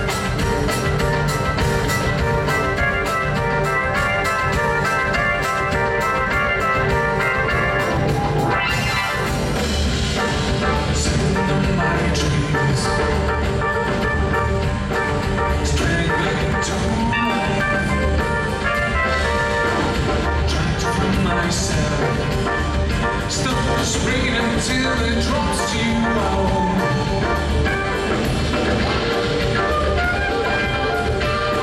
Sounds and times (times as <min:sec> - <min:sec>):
Music: 0:00.0 - 0:31.6.